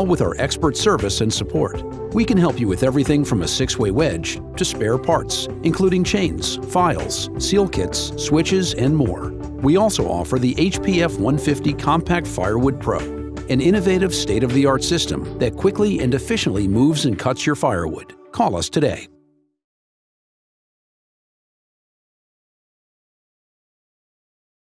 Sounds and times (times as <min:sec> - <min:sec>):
Speech: 0:00.0 - 0:19.1
Music: 0:00.0 - 0:19.6.